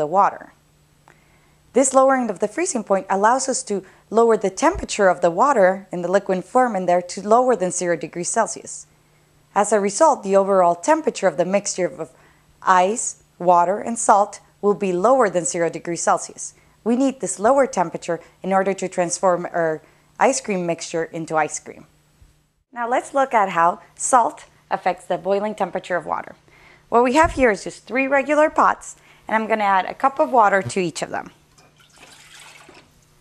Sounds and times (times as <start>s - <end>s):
Speech: 0.0s - 0.6s, 1.8s - 8.8s, 9.6s - 21.9s, 22.8s - 31.4s
Water: 31.6s - 33.2s.